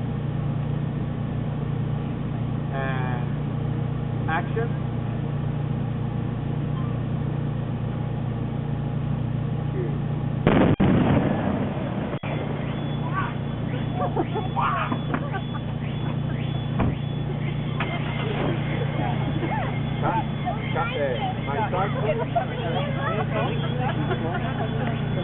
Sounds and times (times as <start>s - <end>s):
Speech: 2.7s - 3.4s, 4.3s - 4.8s, 9.7s - 10.0s
Explosion: 10.4s - 12.6s.